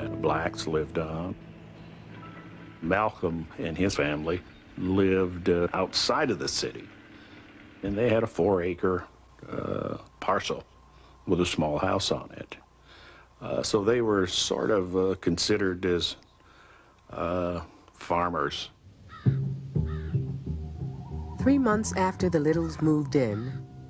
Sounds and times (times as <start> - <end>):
Male speech, man speaking: 0.0 - 1.4, 2.8 - 6.9, 7.8 - 10.7, 11.3 - 12.6, 13.4 - 16.2, 17.1 - 18.8
Narration, monologue: 0.0 - 20.3, 21.4 - 23.8.